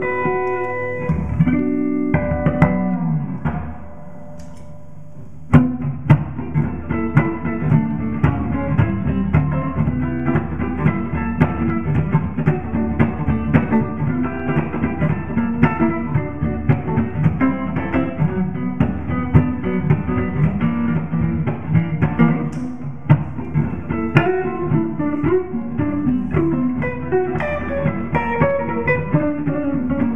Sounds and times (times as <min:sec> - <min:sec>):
Music: 0:00.0 - 0:30.1.